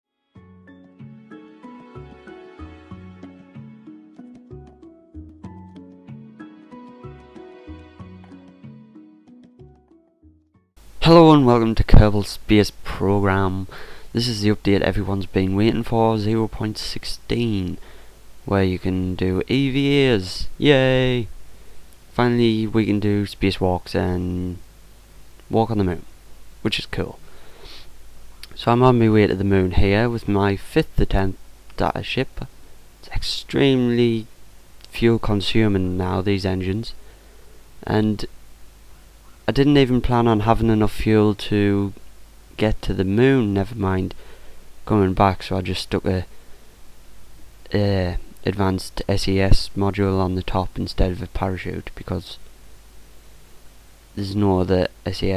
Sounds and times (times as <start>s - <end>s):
Speech: 11.0s - 17.8s, 18.5s - 21.3s, 22.1s - 24.6s, 25.5s - 27.2s, 28.4s - 37.0s, 37.8s - 38.3s, 39.5s - 42.0s, 42.6s - 44.2s, 44.8s - 46.3s, 47.7s - 52.4s, 54.2s - 55.3s.